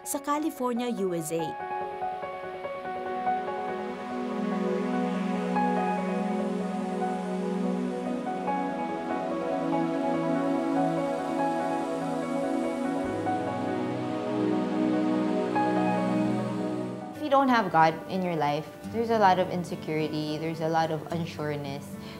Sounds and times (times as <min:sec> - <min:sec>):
New-age music: 0:00.0 - 0:22.1.